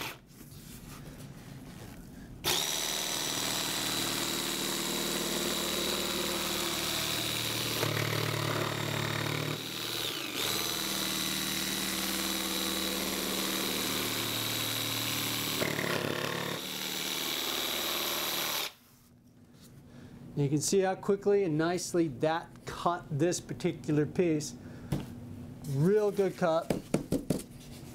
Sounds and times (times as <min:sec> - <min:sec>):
Inside, small room: 0:00.0 - 0:27.9.